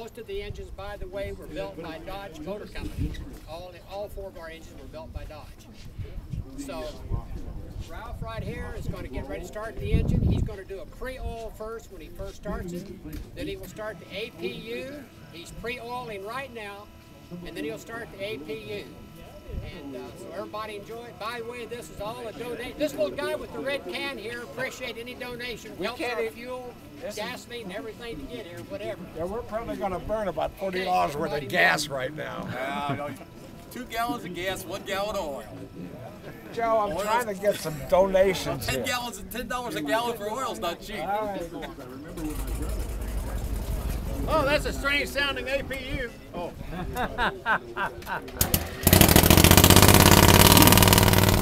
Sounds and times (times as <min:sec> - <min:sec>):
Speech: 0:00.0 - 0:48.4.